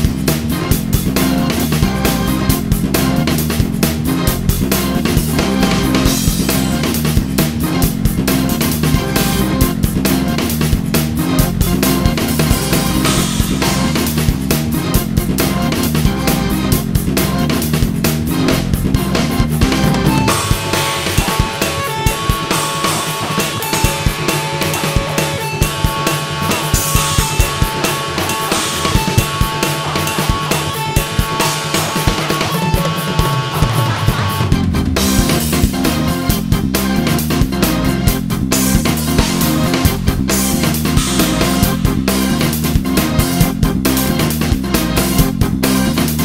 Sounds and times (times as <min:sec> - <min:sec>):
Music: 0:00.0 - 0:46.2.